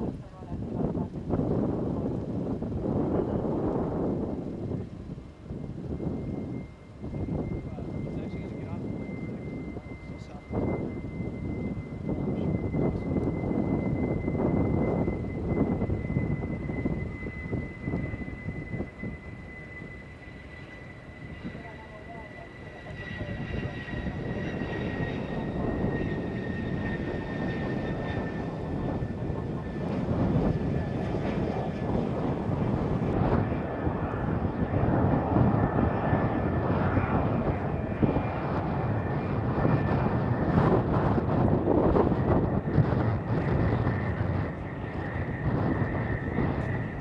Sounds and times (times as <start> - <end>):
Fixed-wing aircraft, airplane: 0.0 - 47.0.